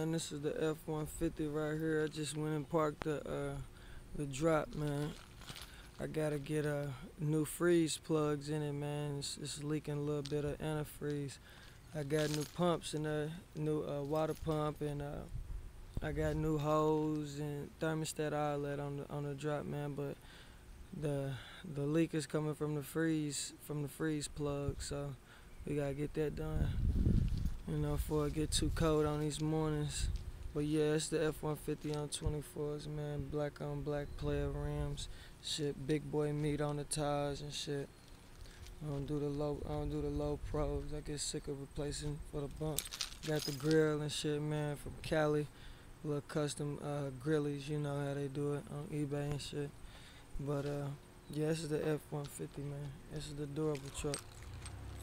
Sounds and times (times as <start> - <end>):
Speech: 0.0 - 5.2, 6.0 - 11.4, 12.0 - 15.3, 16.0 - 20.2, 20.9 - 26.8, 27.7 - 37.9, 38.8 - 49.8, 50.4 - 54.2.